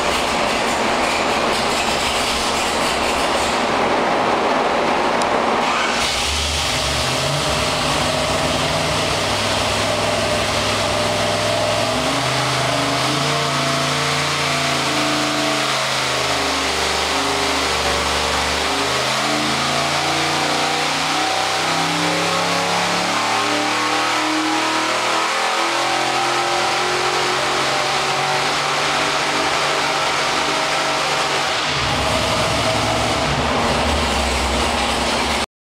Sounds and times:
Heavy engine (low frequency): 0.0 - 35.5.

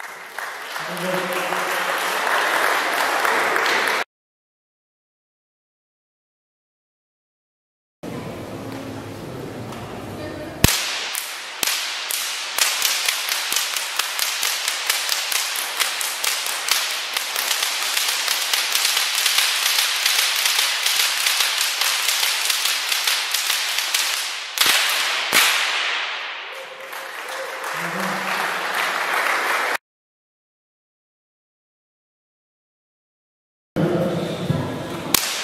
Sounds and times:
Whip: 10.6 - 27.4, 35.1 - 35.4.

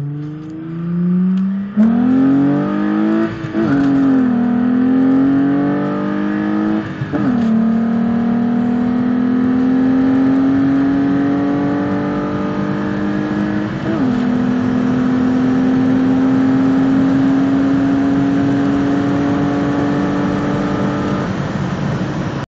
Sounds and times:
Car: 0.0 - 22.5.

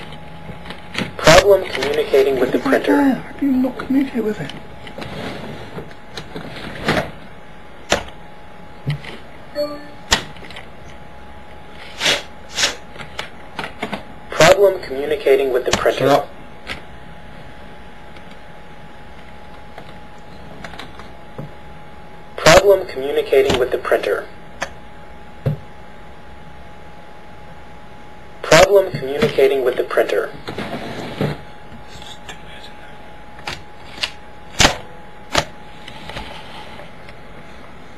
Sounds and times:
Speech: 1.2 - 4.6, 14.3 - 16.3, 22.4 - 24.3, 28.4 - 30.4.

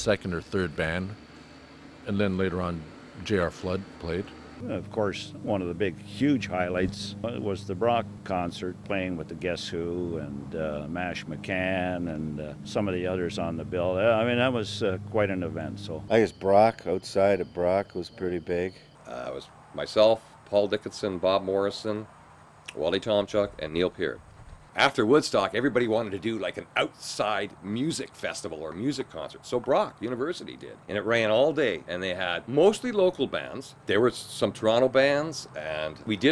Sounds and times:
Speech: 0.0 - 1.2, 2.1 - 22.1, 22.7 - 24.2, 24.8 - 36.3.

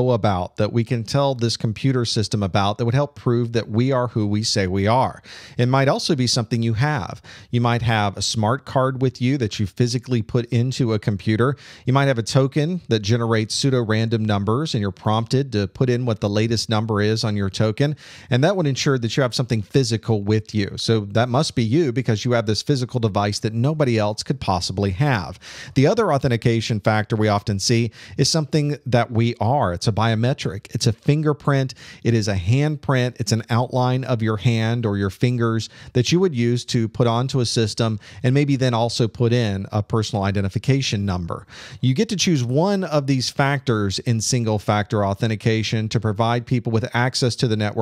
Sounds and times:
Speech: 0.0 - 47.8.

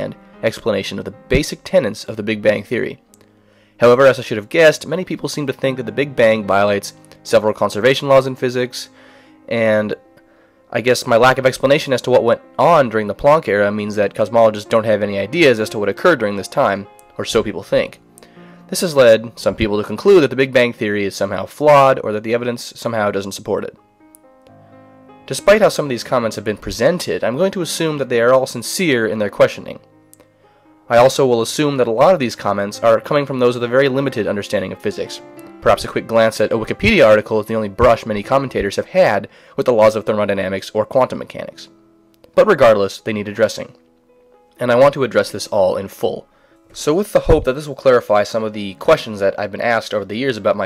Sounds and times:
Speech: 0.0 - 3.0, 3.8 - 10.0, 10.7 - 18.0, 18.7 - 23.8, 25.3 - 29.8, 30.9 - 41.8, 42.4 - 43.8, 44.6 - 50.6.

